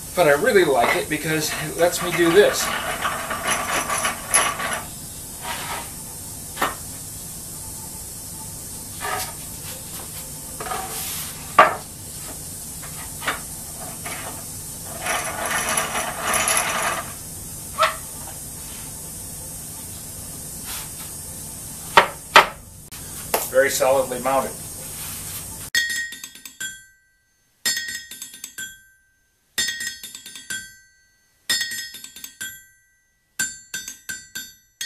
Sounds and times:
Speech: 0.2 - 2.7, 23.4 - 24.6.

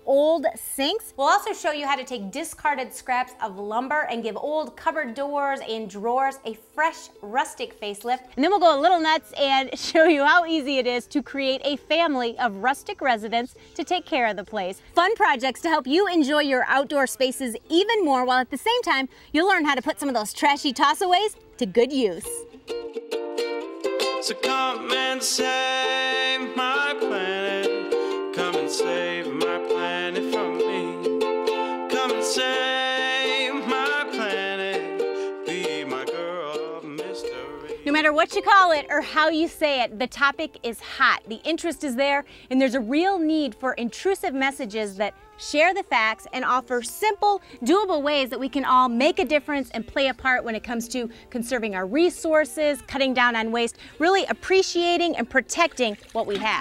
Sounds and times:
Speech: 0.1 - 22.4, 37.9 - 56.6.

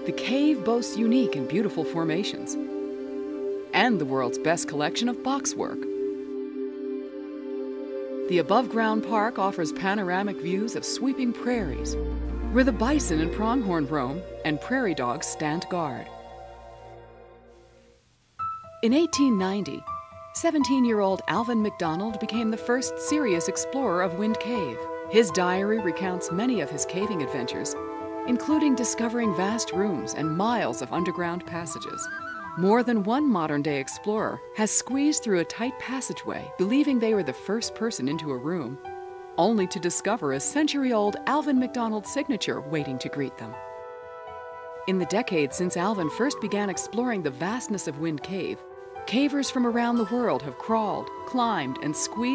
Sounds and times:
Speech: 0.0 - 2.6, 3.8 - 5.8, 8.3 - 16.1, 18.8 - 38.8, 39.4 - 43.6, 44.9 - 52.3
Music: 0.0 - 52.3.

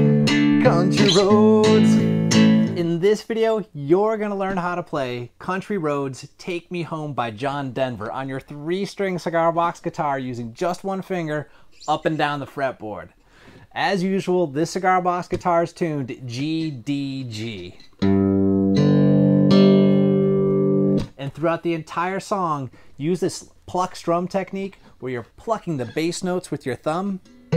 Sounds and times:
Guitar: 0.0 - 5.0, 15.2 - 22.3, 27.1 - 27.5
Speech: 2.8 - 17.9, 21.2 - 27.2.

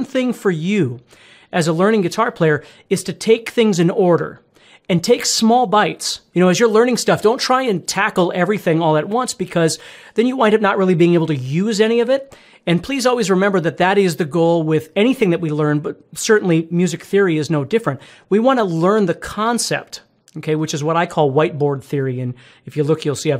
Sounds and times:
Speech: 0.0 - 23.3.

